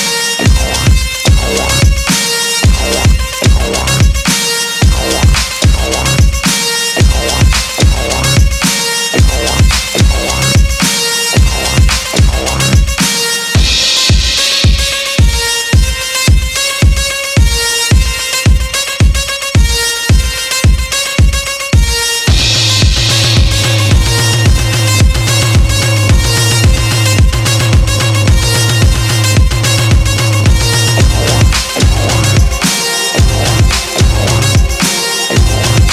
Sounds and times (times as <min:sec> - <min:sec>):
Music: 0:00.0 - 0:35.9.